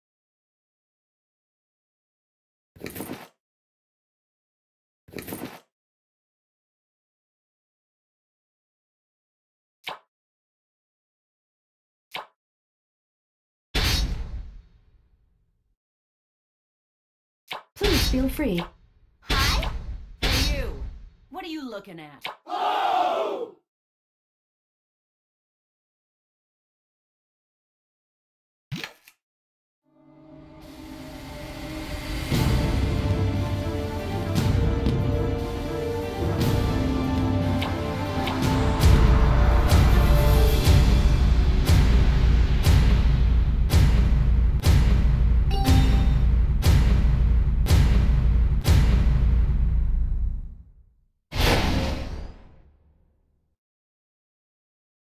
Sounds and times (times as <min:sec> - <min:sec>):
Music: 0:29.9 - 0:49.5.